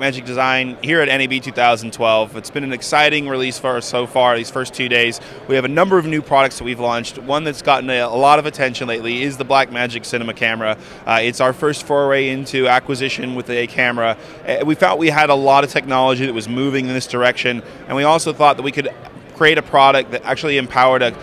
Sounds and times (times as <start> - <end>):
Speech: 0.0 - 21.2.